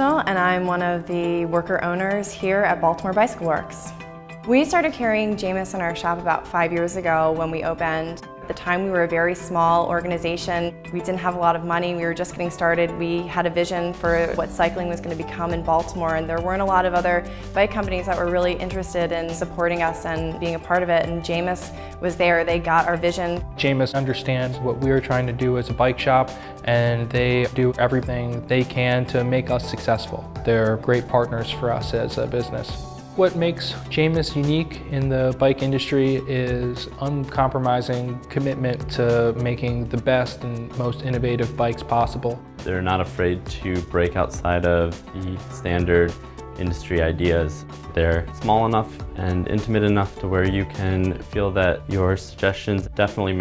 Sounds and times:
Music: 0.0s - 53.4s.

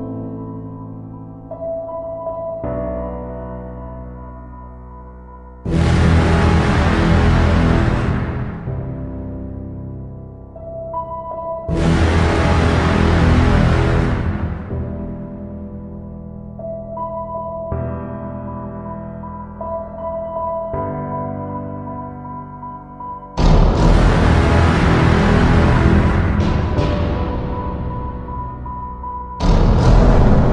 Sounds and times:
Music: 0.0s - 30.5s.

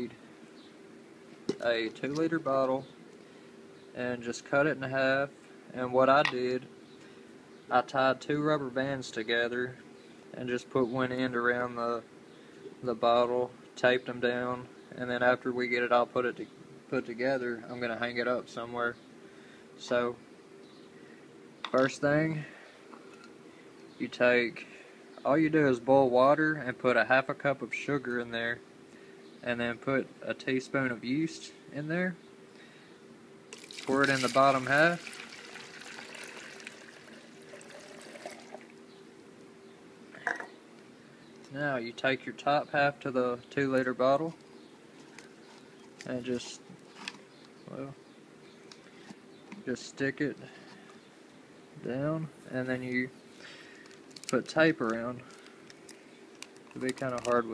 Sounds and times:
Speech: 1.5s - 2.9s, 4.0s - 6.7s, 7.7s - 9.8s, 10.4s - 12.1s, 12.8s - 19.0s, 19.8s - 20.2s, 21.7s - 22.6s, 24.0s - 28.6s, 29.4s - 32.2s, 33.9s - 35.0s, 41.5s - 44.4s, 46.0s - 46.6s, 47.7s - 48.0s, 49.6s - 50.5s, 51.8s - 53.2s, 54.3s - 55.3s, 56.8s - 57.5s.

